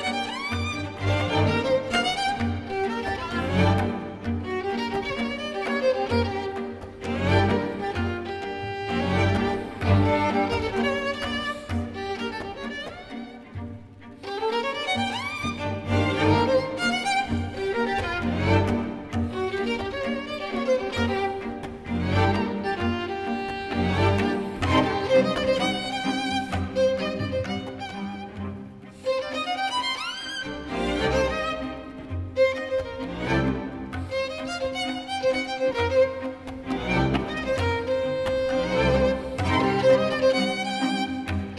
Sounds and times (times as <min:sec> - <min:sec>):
Violin, fiddle: 0:00.0 - 0:41.5.